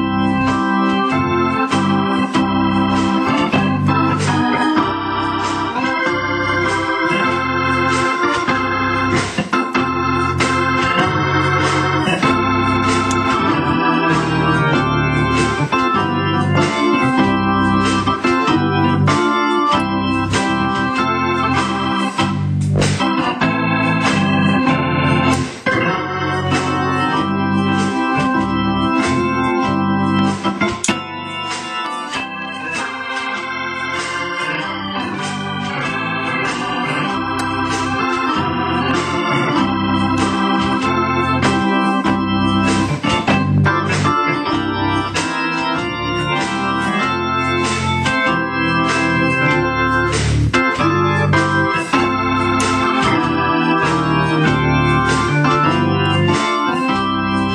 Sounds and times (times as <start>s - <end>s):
Electric piano: 0.0s - 57.5s
Hammond organ: 0.0s - 57.5s.